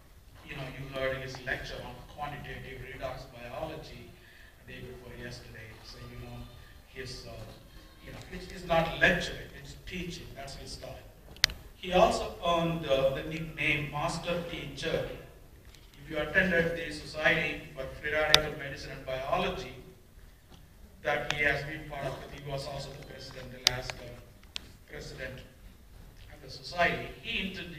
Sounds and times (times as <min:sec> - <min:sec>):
Speech: 0:00.4 - 0:11.1, 0:11.8 - 0:15.4, 0:16.0 - 0:20.0, 0:21.0 - 0:24.3, 0:24.9 - 0:25.6, 0:26.2 - 0:27.7.